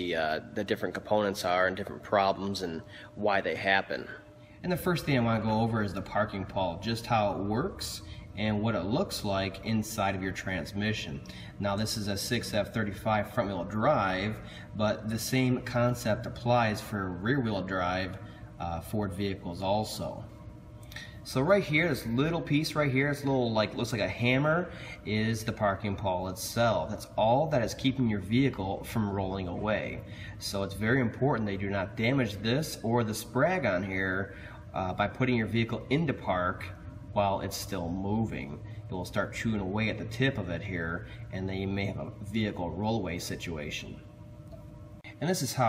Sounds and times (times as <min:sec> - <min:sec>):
Speech: 0:00.0 - 0:20.3, 0:21.2 - 0:44.0, 0:45.2 - 0:45.6.